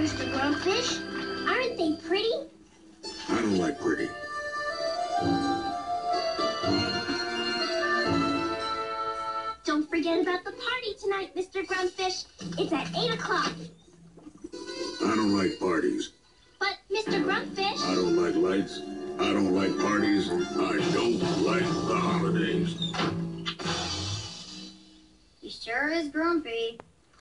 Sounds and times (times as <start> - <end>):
Music: 0.0 - 10.8, 11.8 - 25.4
Speech: 17.0 - 22.8.